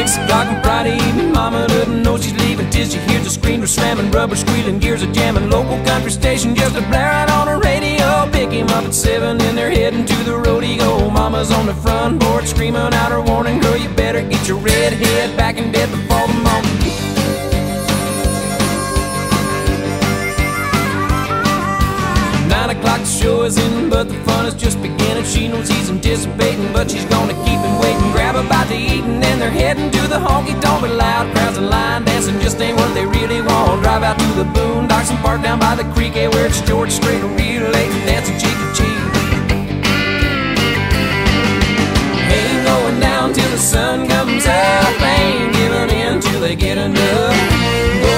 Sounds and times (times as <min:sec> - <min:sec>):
Music: 0:00.0 - 0:48.1.